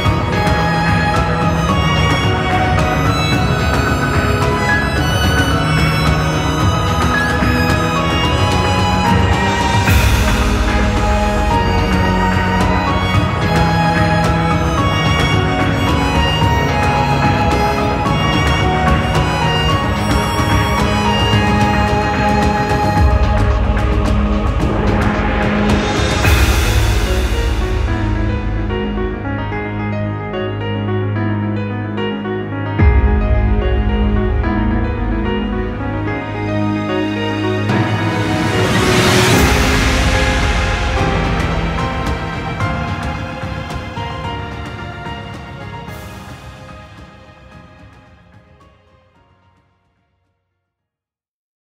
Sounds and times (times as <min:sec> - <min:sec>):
Theme music: 0:00.0 - 0:49.7
Soundtrack music: 0:00.0 - 0:49.8.